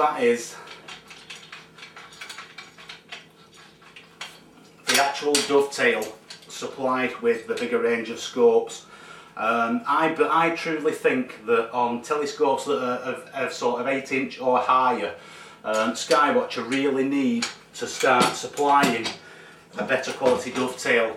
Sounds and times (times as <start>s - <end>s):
Speech: 0.0s - 0.7s, 4.9s - 19.2s, 19.8s - 21.1s
Inside, small room: 0.0s - 21.1s.